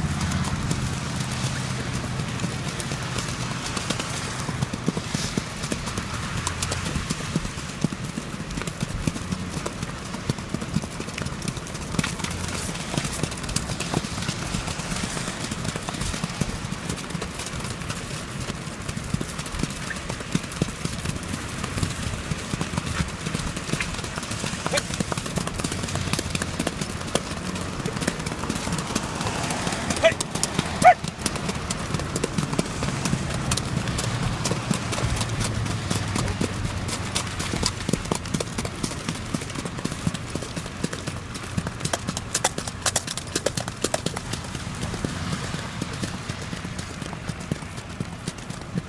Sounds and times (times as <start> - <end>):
Clip-clop: 0.0 - 48.8.